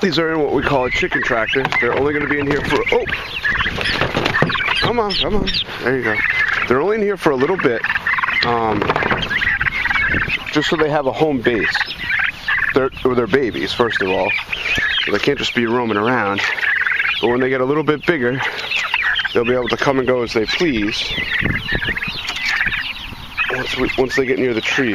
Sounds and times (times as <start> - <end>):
Fowl: 0.0 - 24.9.